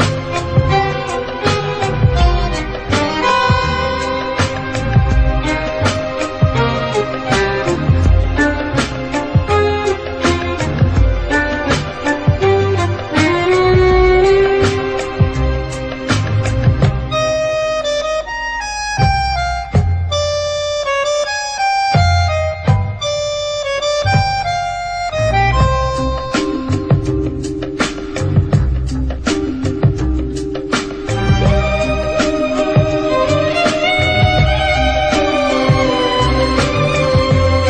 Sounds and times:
Harmonica: 0.0s - 37.6s.

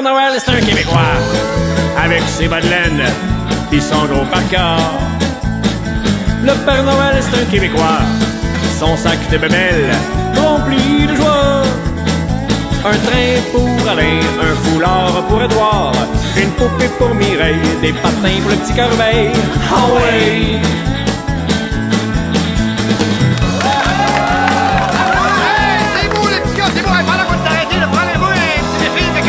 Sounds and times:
Music: 0.0s - 29.2s.

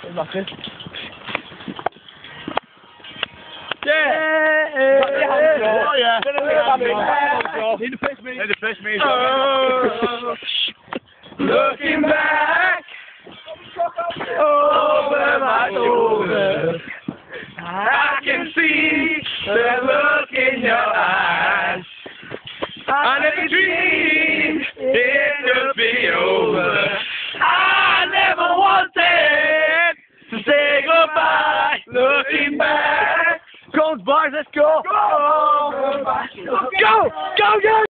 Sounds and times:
Male singing: 3.8s - 10.4s, 11.4s - 12.9s, 13.5s - 16.9s, 17.6s - 21.8s, 22.9s - 37.9s.

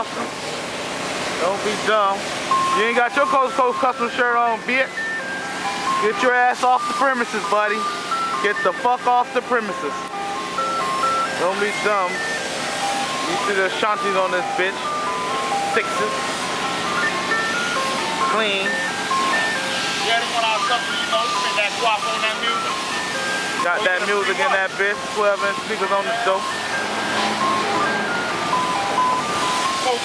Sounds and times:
Car: 0.0s - 14.2s, 14.8s - 30.0s
Speech: 1.4s - 2.2s, 20.0s - 22.6s
Music: 4.9s - 30.0s.

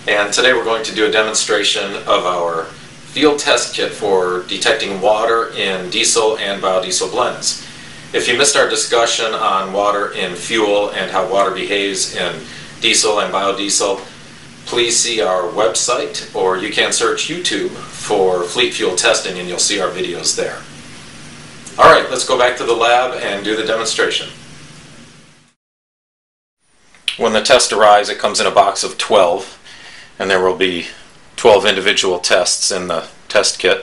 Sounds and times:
Speech: 0.0s - 20.7s, 21.7s - 24.4s, 27.1s - 29.6s, 30.2s - 33.8s.

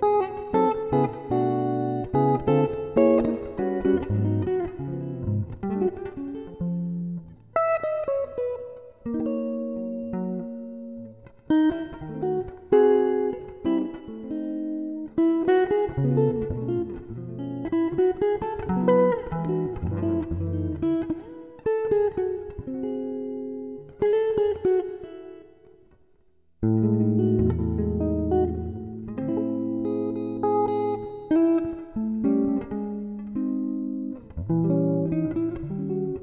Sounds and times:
Guitar: 0.0s - 36.2s.

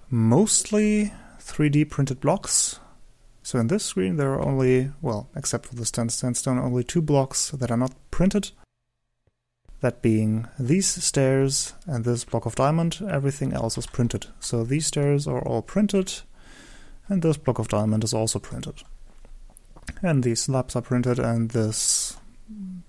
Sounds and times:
Speech: 0.1s - 8.6s, 9.8s - 16.3s, 17.0s - 18.9s, 19.9s - 22.8s.

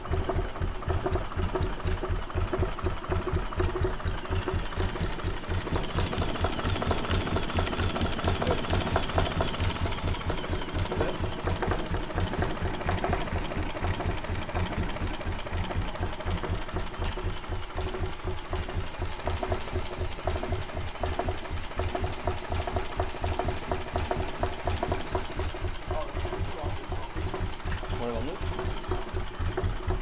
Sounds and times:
Speech: 8.3s - 8.8s, 10.9s - 11.2s, 25.9s - 27.2s, 27.8s - 28.7s.

